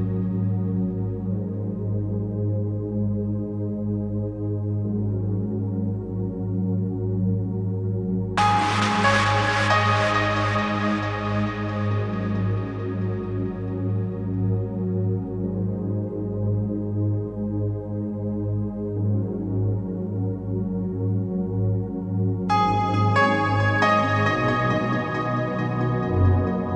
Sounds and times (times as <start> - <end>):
Ambient music: 0.0 - 26.7.